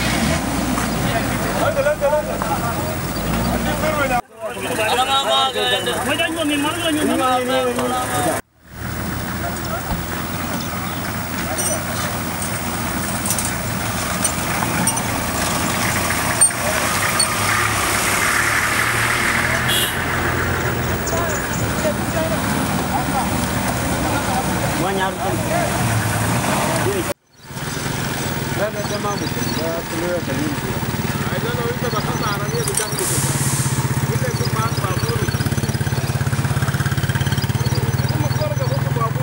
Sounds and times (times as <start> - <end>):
Vehicle: 0.0 - 39.2
Speech: 1.0 - 8.4, 21.0 - 26.0, 28.6 - 33.3, 34.0 - 36.0, 37.5 - 39.2.